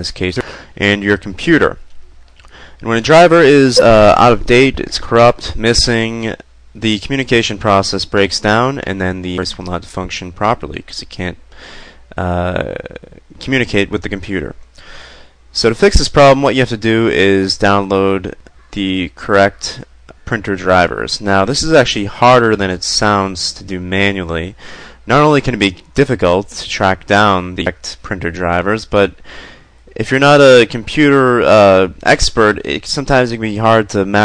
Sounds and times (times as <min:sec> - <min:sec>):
Speech: 0:00.0 - 0:01.8, 0:02.8 - 0:11.4, 0:12.1 - 0:14.7, 0:15.5 - 0:29.2, 0:29.9 - 0:34.2.